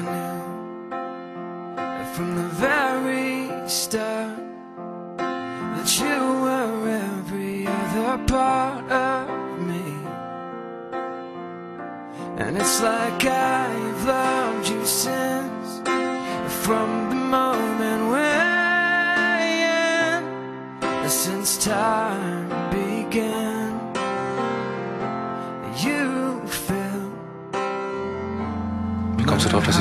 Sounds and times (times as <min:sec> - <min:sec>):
Music: 0:00.0 - 0:29.8.